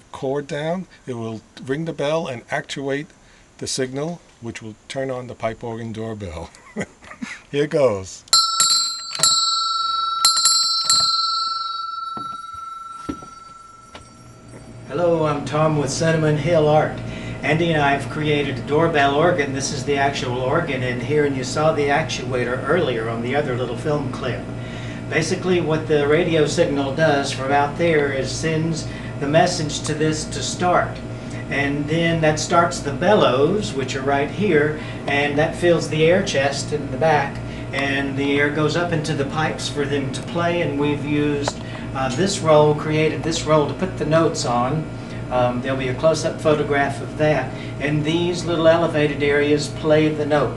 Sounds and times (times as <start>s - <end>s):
Speech: 0.0s - 6.6s, 7.5s - 8.3s, 14.9s - 24.5s, 25.1s - 50.5s
Doorbell: 8.4s - 14.9s.